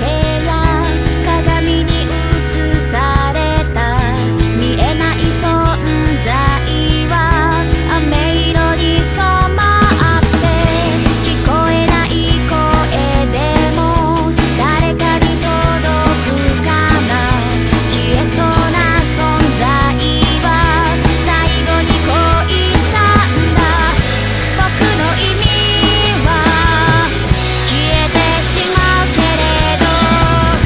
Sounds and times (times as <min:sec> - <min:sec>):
Music: 0:00.0 - 0:30.6.